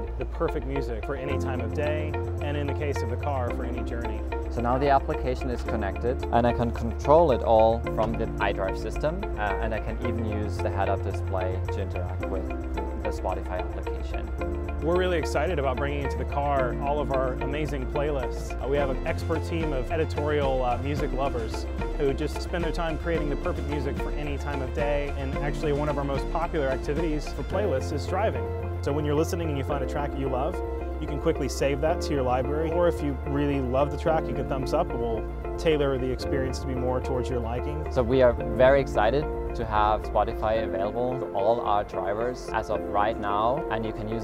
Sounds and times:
Music: 0.0s - 44.2s
Speech: 0.2s - 44.2s.

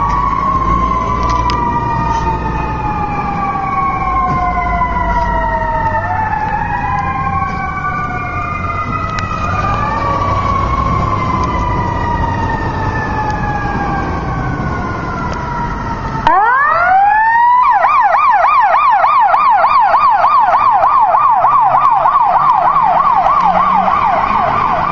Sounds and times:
Fire engine, fire truck (siren): 0.0s - 24.9s.

